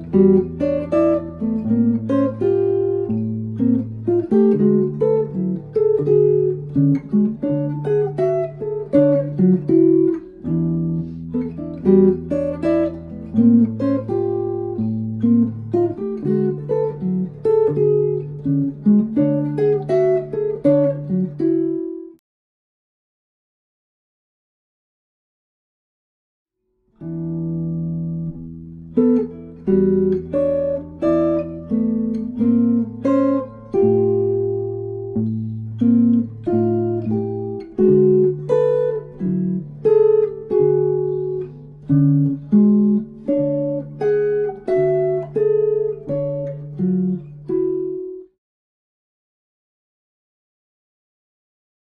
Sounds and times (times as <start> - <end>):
Acoustic guitar: 0.0 - 22.2, 27.0 - 48.4.